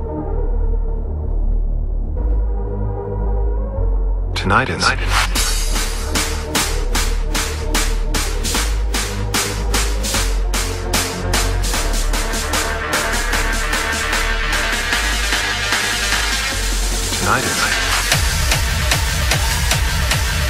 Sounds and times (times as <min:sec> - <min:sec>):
Music: 0:00.0 - 0:20.4
Speech: 0:04.4 - 0:05.3, 0:17.2 - 0:17.9.